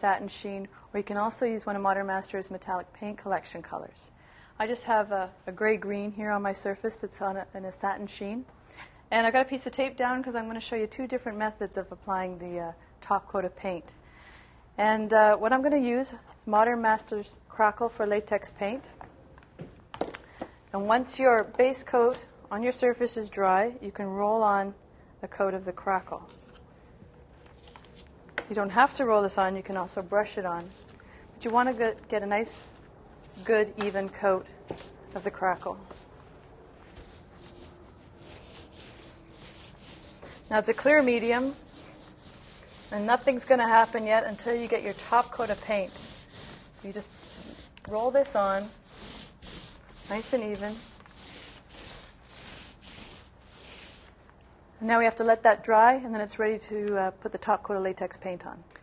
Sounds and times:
Speech: 0.0 - 8.5, 42.9 - 46.0, 47.9 - 48.8, 50.1 - 50.9, 54.8 - 58.7.

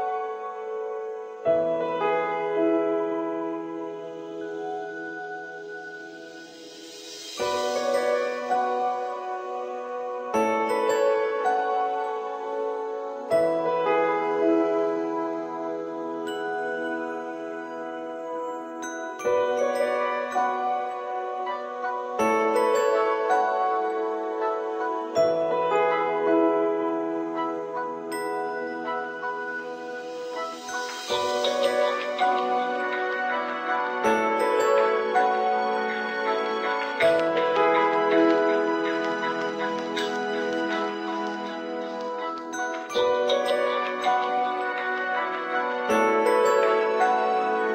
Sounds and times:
Glockenspiel: 0.0 - 47.7
Marimba, xylophone: 28.0 - 47.7.

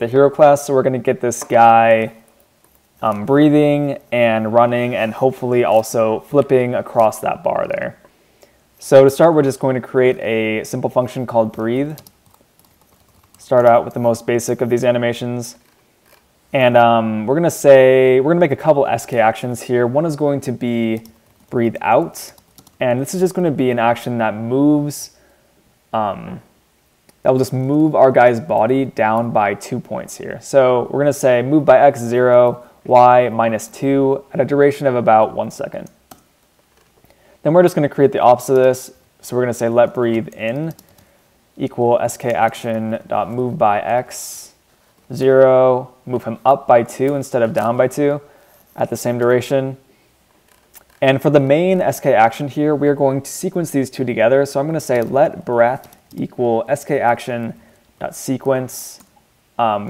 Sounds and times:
Speech: 0.0 - 2.2, 3.0 - 8.0, 8.8 - 12.0, 13.4 - 15.6, 16.5 - 25.2, 26.0 - 26.5, 27.2 - 36.0, 37.4 - 40.8, 41.6 - 49.8, 51.0 - 59.8.

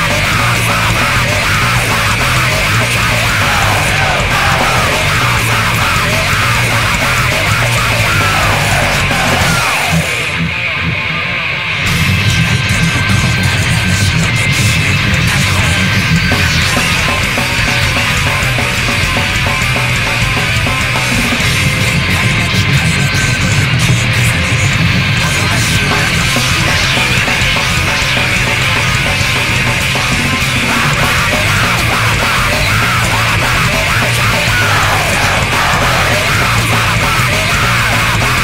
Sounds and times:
Cacophony: 0.0 - 38.4
Music: 0.0 - 38.4.

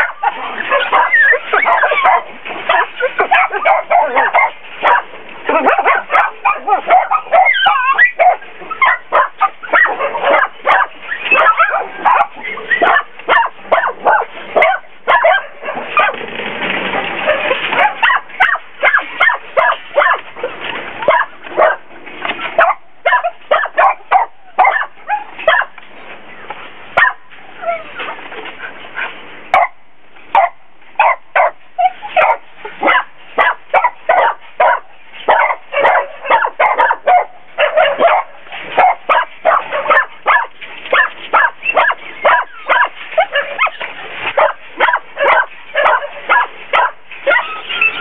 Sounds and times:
Bow-wow: 0.0 - 16.2, 17.2 - 20.3, 21.0 - 21.8, 22.6 - 25.8, 27.0 - 27.9, 29.6 - 43.8, 44.4 - 48.0.

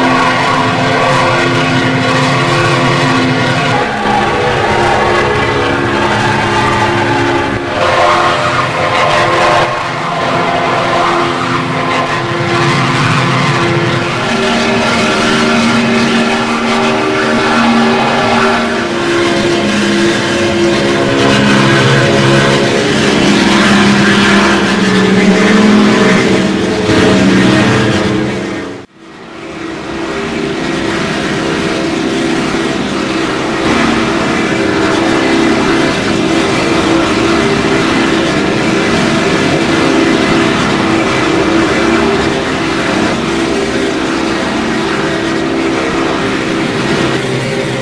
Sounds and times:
Aircraft engine: 0.0 - 47.8.

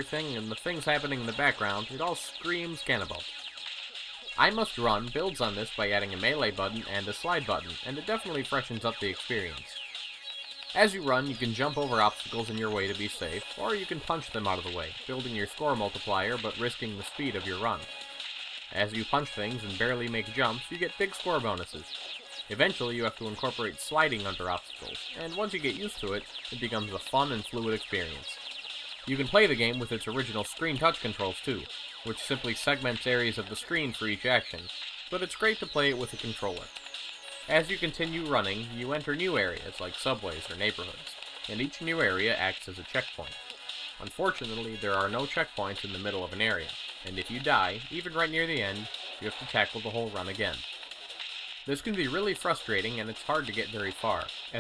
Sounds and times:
Speech: 0.0 - 3.2, 4.4 - 9.8, 10.8 - 17.9, 18.7 - 21.9, 22.5 - 28.4, 29.1 - 36.7, 37.5 - 43.4, 44.0 - 50.6, 51.7 - 54.6
Music: 0.0 - 54.6.

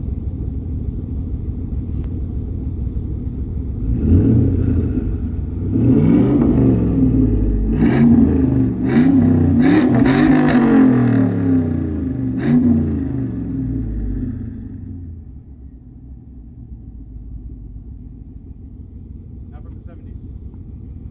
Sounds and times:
Car: 0.0 - 21.1.

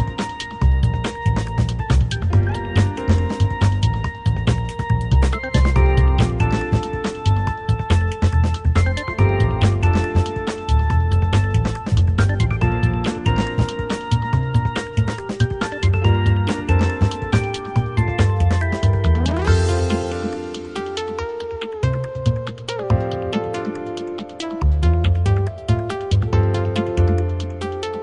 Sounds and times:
Background music: 0.0 - 28.0.

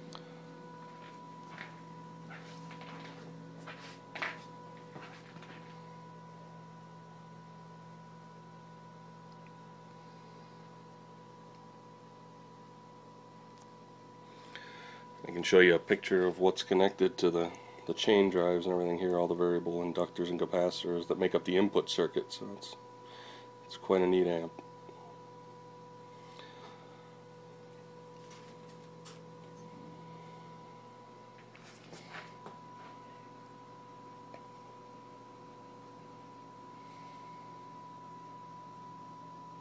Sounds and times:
Speech: 15.2 - 22.8, 23.7 - 24.6.

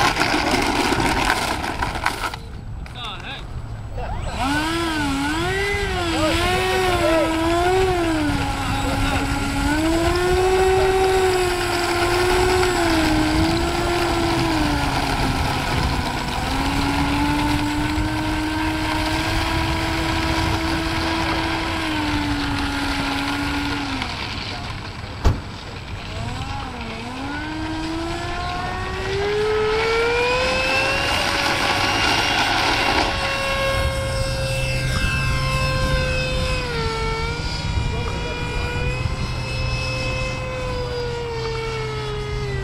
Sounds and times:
Fixed-wing aircraft, airplane: 6.9 - 42.6.

